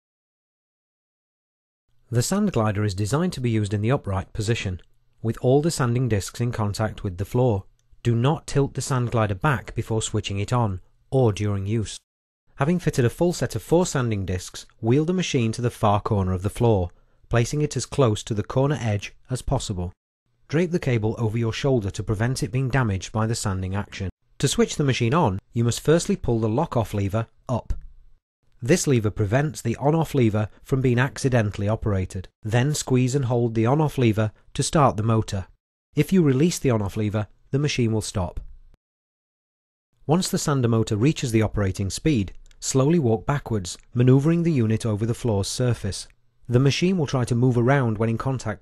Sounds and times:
Speech: 2.1 - 12.0, 12.6 - 27.8, 28.6 - 38.5, 40.1 - 48.6.

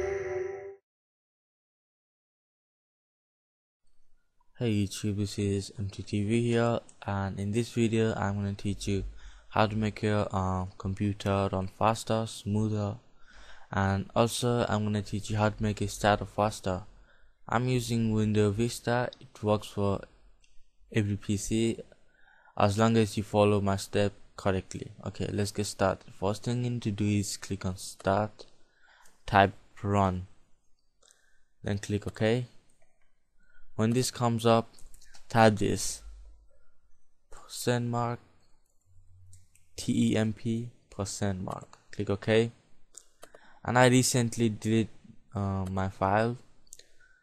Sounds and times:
Speech: 4.6 - 13.0, 13.7 - 16.9, 17.5 - 20.1, 20.9 - 21.9, 22.6 - 28.4, 29.3 - 30.3, 31.6 - 32.6, 33.8 - 36.1, 37.4 - 38.2, 39.8 - 42.6, 43.6 - 46.4.

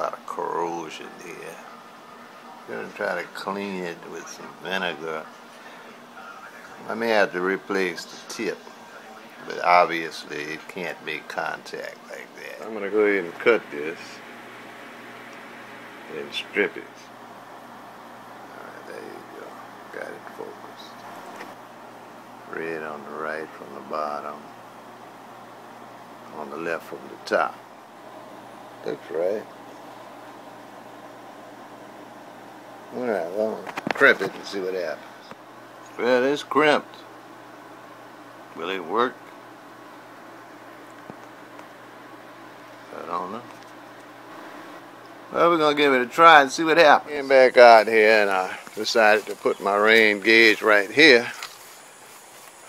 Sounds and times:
Speech: 0.0 - 1.8, 2.6 - 14.2, 16.1 - 17.1, 18.5 - 21.0, 22.5 - 24.5, 26.3 - 27.6, 28.8 - 29.5, 32.9 - 35.1, 36.0 - 37.0, 38.6 - 39.2, 42.9 - 43.5, 45.3 - 51.4.

